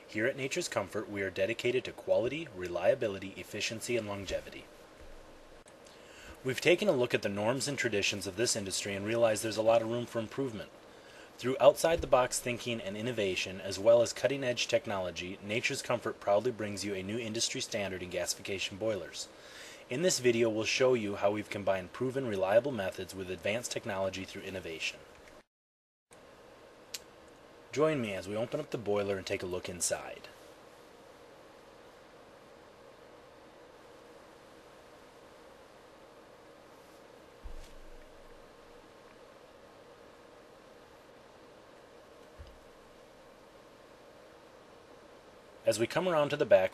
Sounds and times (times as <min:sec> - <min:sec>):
Speech: 0:00.1 - 0:04.7, 0:06.4 - 0:10.8, 0:11.4 - 0:19.3, 0:19.9 - 0:25.1, 0:27.7 - 0:30.4, 0:45.6 - 0:46.7.